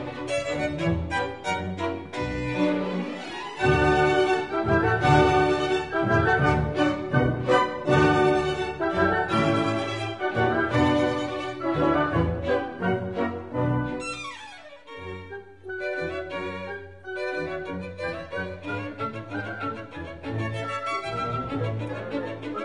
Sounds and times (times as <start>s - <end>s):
Violin, fiddle: 0.0s - 22.6s.